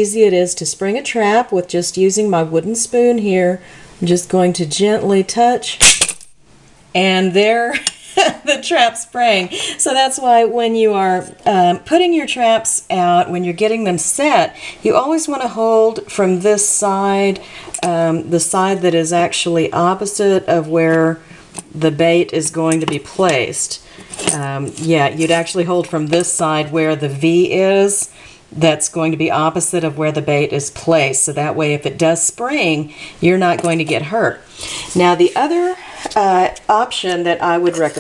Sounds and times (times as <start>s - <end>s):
Speech: 0.0s - 5.8s, 7.0s - 38.0s.